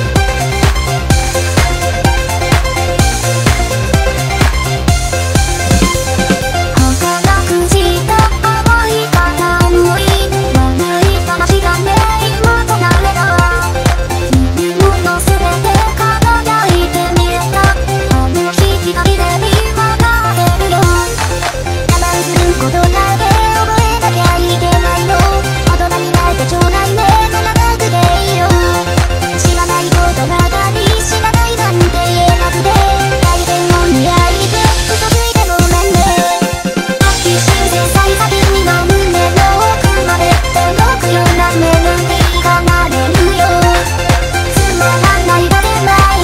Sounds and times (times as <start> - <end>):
Music: 0.0 - 46.2.